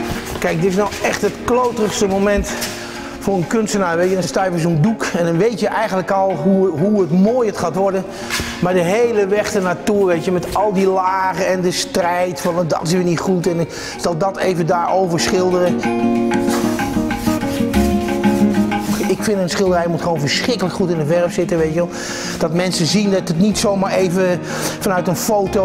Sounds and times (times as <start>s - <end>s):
Music: 0.0s - 25.6s
Speech: 0.4s - 2.6s, 3.2s - 15.9s, 19.0s - 25.6s.